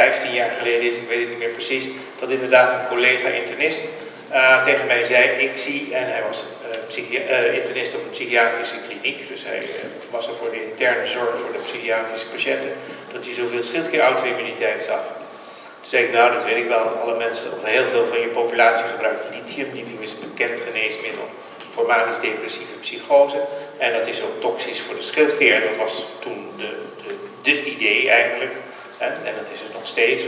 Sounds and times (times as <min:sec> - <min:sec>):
Speech: 0:00.0 - 0:15.2, 0:15.8 - 0:30.2.